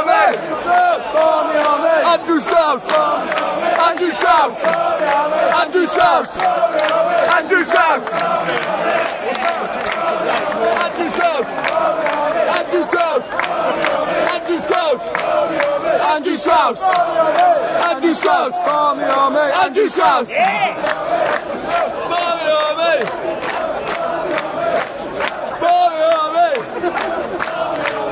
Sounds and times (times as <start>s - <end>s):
Speech: 16.0s - 20.9s, 24.8s - 28.1s.